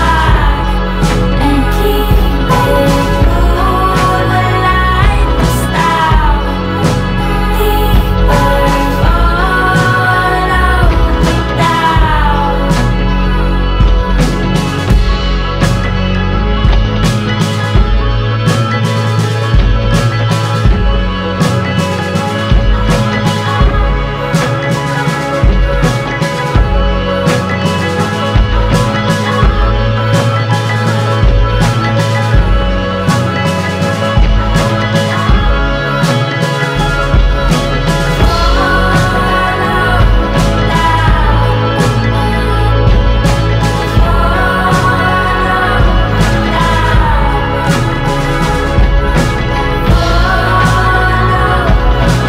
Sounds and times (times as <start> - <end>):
Psychedelic rock: 0.0 - 52.2.